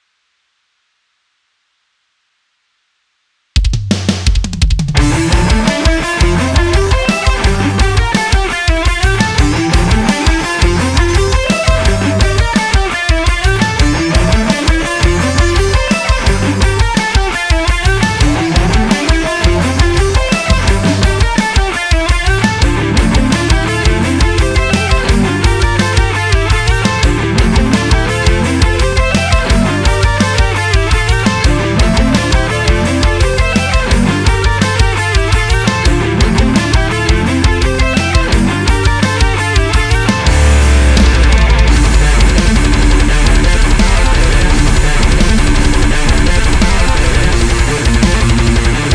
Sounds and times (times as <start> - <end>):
Drum: 3.6 - 48.9
Drum kit: 3.6 - 48.9.